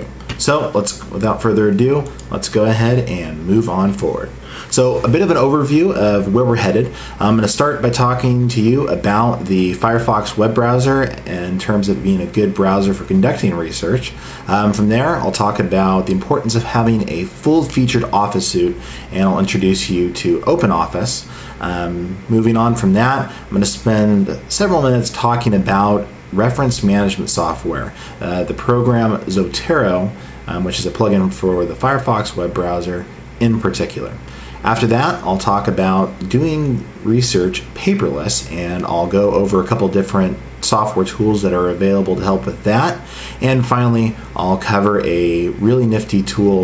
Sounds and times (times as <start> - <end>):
Speech: 0.0 - 46.6.